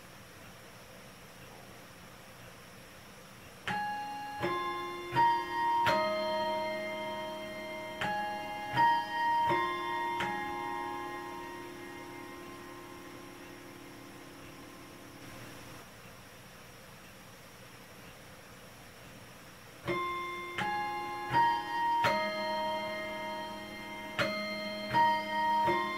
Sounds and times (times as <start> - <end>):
Music: 3.7 - 15.4, 19.9 - 25.9.